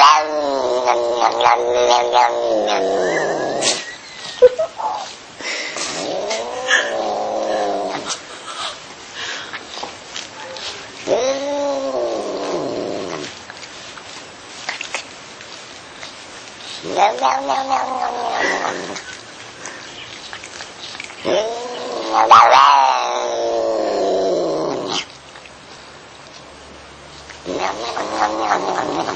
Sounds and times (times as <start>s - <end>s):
Caterwaul: 0.0s - 3.8s, 5.9s - 8.1s, 11.0s - 13.3s, 16.8s - 19.0s, 21.2s - 25.0s, 27.5s - 29.1s.